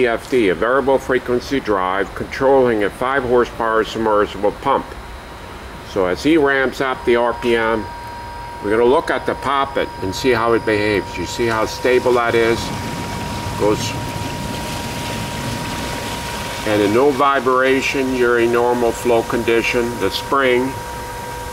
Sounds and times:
Speech: 0.0s - 5.0s, 5.9s - 7.9s, 8.6s - 12.7s, 13.6s - 14.0s, 16.7s - 20.8s.

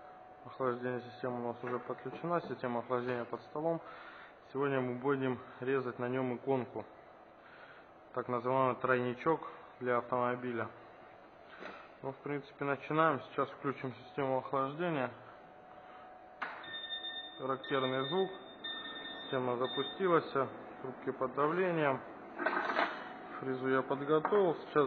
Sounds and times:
Speech: 0.4s - 3.9s, 4.5s - 6.9s, 8.2s - 10.8s, 12.0s - 15.2s, 17.4s - 18.4s, 19.3s - 22.1s, 23.4s - 24.8s.

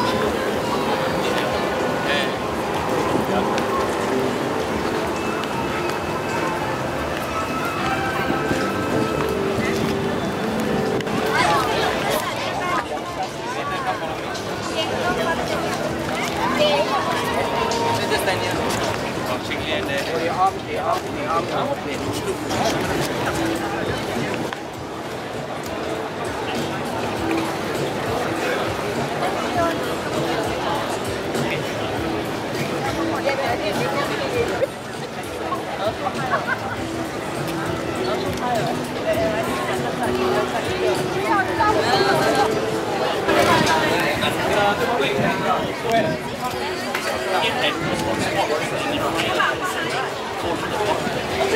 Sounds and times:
Music: 0.0s - 51.5s
Speech: 0.0s - 51.5s.

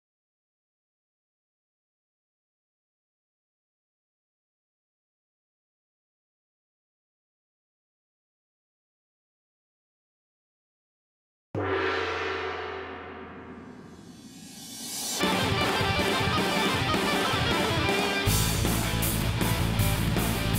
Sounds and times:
Music: 11.6s - 20.5s.

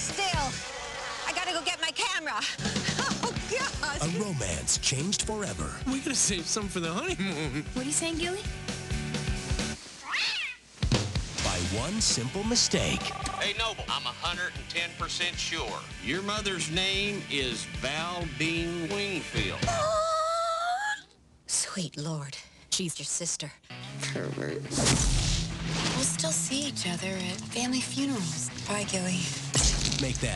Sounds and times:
Music: 0.0s - 9.8s, 10.8s - 19.8s, 23.6s - 30.3s.

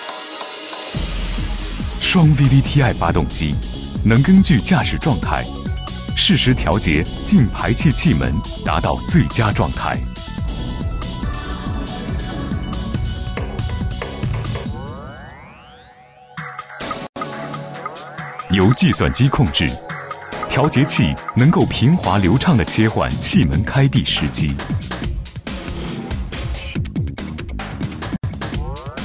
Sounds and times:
Music: 0.0s - 29.0s
Speech: 2.0s - 5.5s, 6.2s - 10.0s, 18.5s - 19.8s, 20.5s - 24.8s.

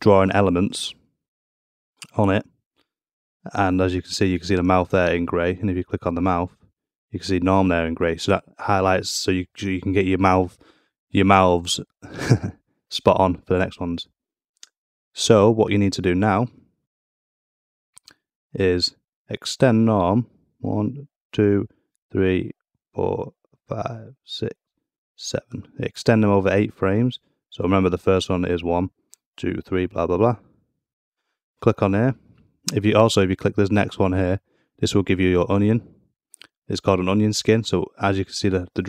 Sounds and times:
Speech: 0.0s - 1.0s, 2.0s - 2.5s, 3.5s - 12.0s, 12.9s - 14.2s, 15.2s - 16.6s, 18.6s - 24.6s, 25.2s - 30.4s, 31.6s - 38.8s.

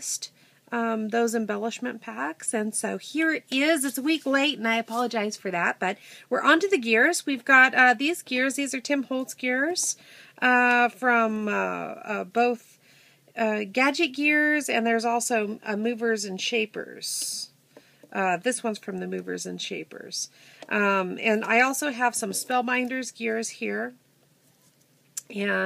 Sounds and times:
Speech: 0.0s - 12.7s, 13.4s - 17.5s, 18.1s - 24.0s, 25.2s - 25.6s.

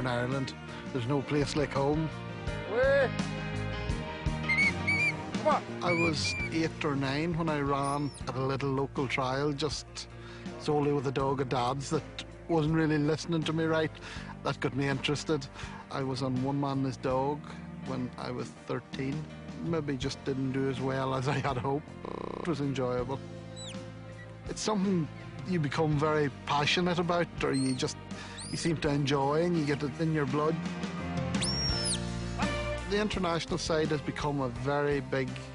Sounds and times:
Speech: 0.0s - 2.1s, 5.4s - 23.2s, 24.5s - 30.6s, 32.9s - 35.4s
Music: 0.0s - 35.5s.

